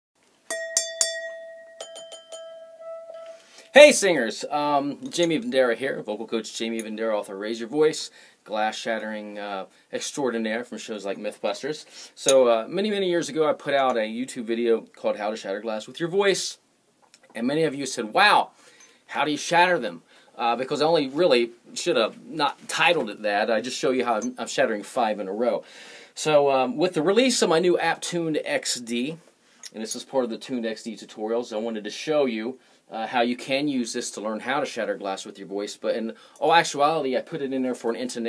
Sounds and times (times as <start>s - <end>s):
Speech: 3.7s - 16.6s, 17.3s - 18.5s, 19.1s - 25.6s, 26.2s - 38.2s.